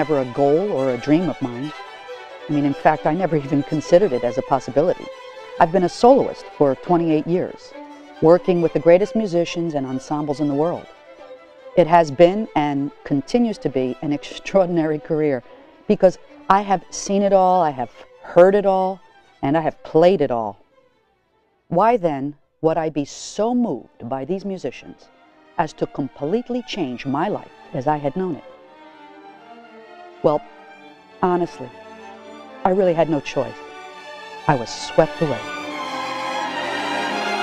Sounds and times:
Speech: 0.0s - 1.7s, 2.5s - 10.9s, 11.8s - 20.6s, 21.7s - 25.0s, 25.6s - 28.4s, 30.2s - 30.4s, 31.2s - 31.7s, 32.7s - 33.6s, 34.5s - 35.5s
Music: 0.0s - 37.4s.

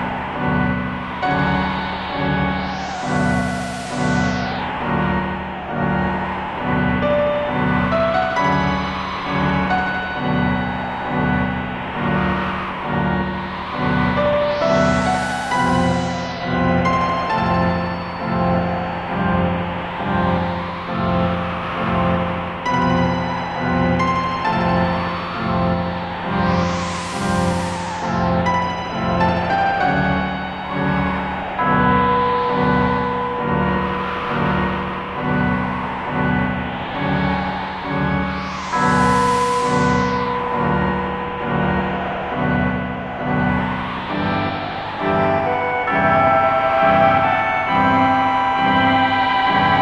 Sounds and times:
Music: 0.0s - 49.8s.

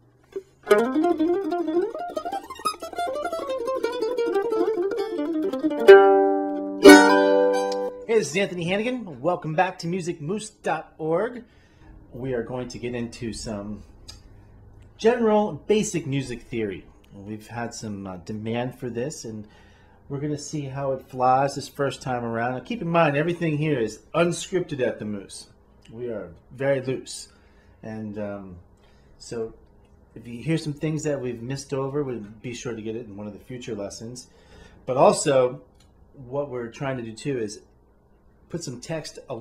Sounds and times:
Speech: 8.1s - 11.5s, 12.1s - 13.9s, 15.0s - 19.5s, 20.1s - 29.6s, 30.2s - 34.3s, 34.9s - 37.7s, 38.5s - 39.4s.

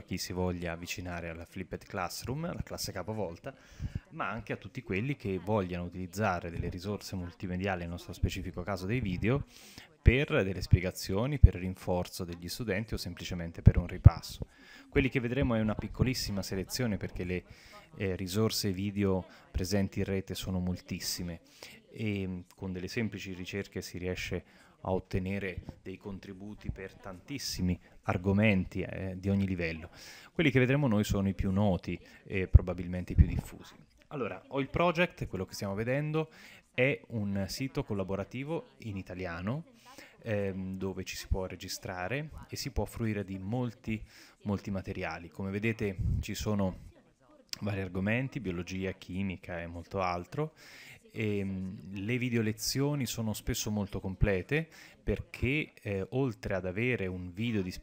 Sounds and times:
Speech: 0.0s - 57.8s.

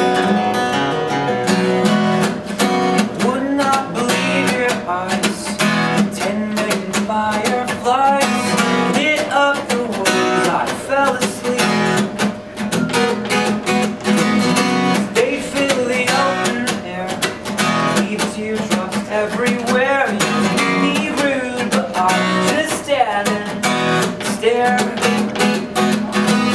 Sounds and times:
Music: 0.0s - 26.5s.

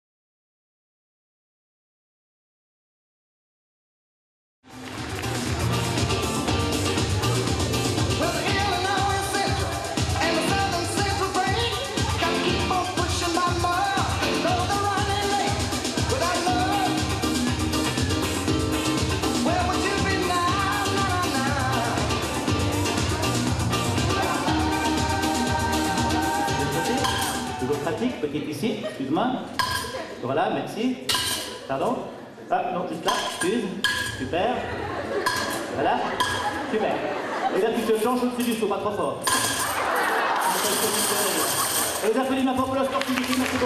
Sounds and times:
Speech: 36.7s - 39.3s, 40.5s - 43.6s.

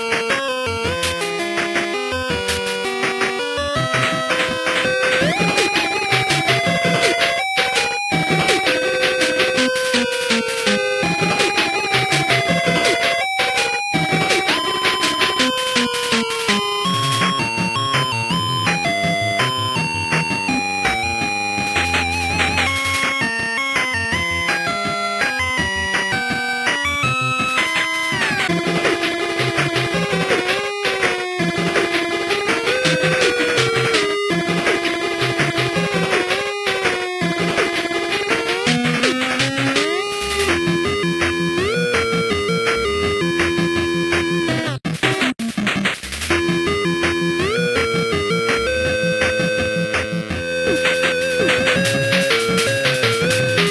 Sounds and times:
Video game music: 0.0s - 53.7s.

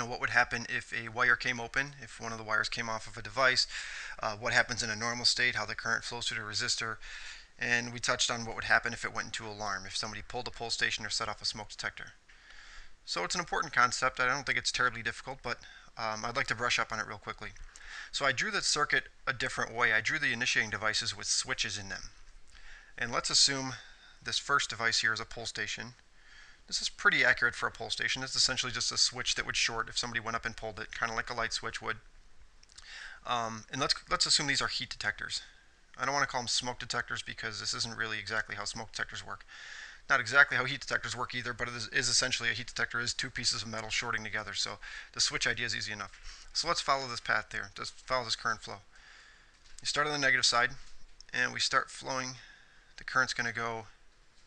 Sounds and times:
Speech: 0.0s - 7.0s, 7.6s - 12.2s, 13.1s - 22.2s, 23.0s - 26.0s, 26.7s - 32.0s, 33.2s - 39.5s, 40.1s - 48.9s, 49.8s - 54.0s.

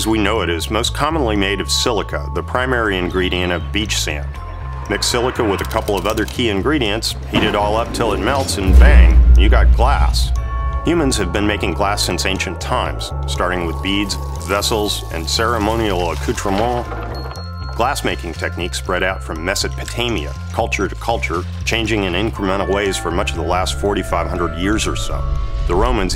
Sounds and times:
Speech: 0.0s - 16.9s, 17.8s - 26.1s
Music: 0.0s - 26.1s.

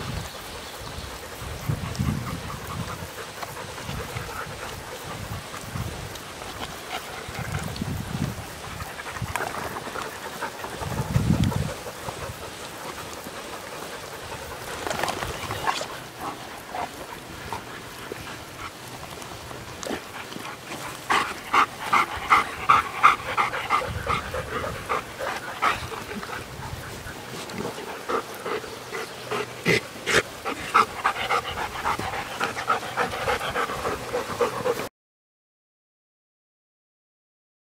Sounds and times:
Waterfall: 0.0s - 34.9s.

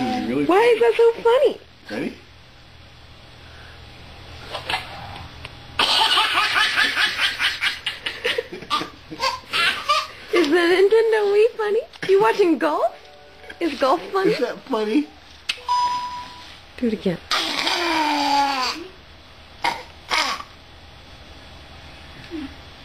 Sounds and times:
Laughter: 5.9s - 9.2s.

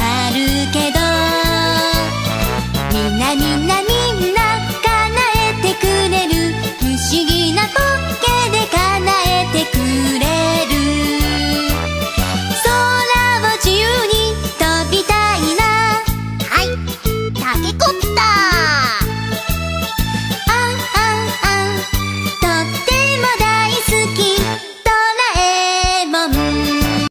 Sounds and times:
Child singing: 0.0s - 2.1s, 3.1s - 11.7s, 12.6s - 16.8s, 20.5s - 21.8s, 22.4s - 26.6s
Music: 0.0s - 27.1s.

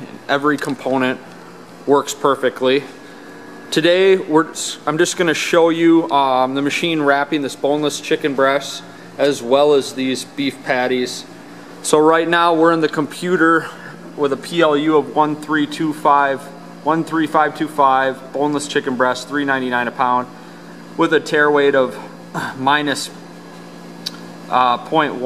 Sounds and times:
Speech: 0.0s - 1.2s, 1.9s - 3.0s, 3.7s - 20.3s, 21.0s - 23.2s, 24.5s - 25.2s.

